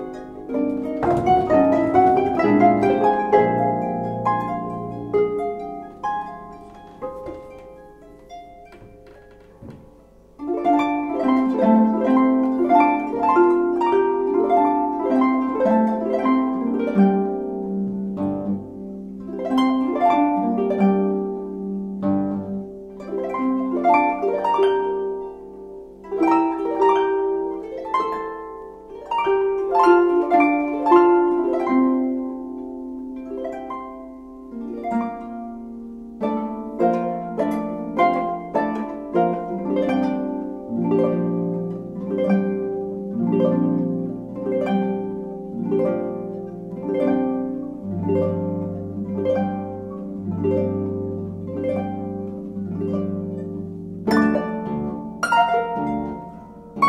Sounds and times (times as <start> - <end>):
Bowed string instrument: 0.0 - 56.8
Harp: 0.0 - 56.8
Plucked string instrument: 0.0 - 56.8.